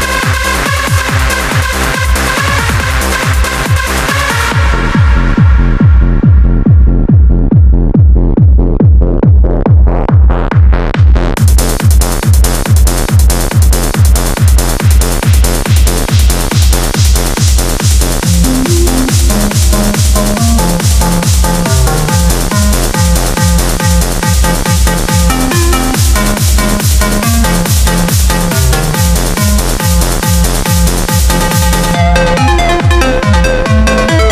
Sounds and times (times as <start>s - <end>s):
Techno: 0.0s - 34.3s
Trance music: 0.0s - 34.3s.